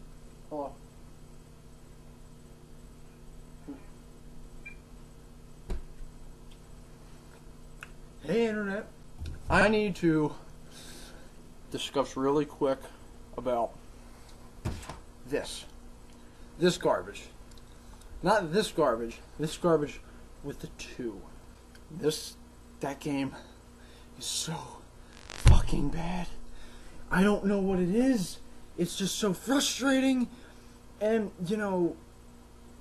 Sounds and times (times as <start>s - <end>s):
Speech: 0.5s - 0.8s, 8.2s - 10.4s, 11.7s - 13.8s, 15.3s - 15.8s, 16.6s - 17.4s, 18.2s - 21.3s, 21.9s - 23.5s, 24.2s - 24.8s, 25.4s - 26.4s, 27.1s - 30.3s, 31.0s - 32.0s.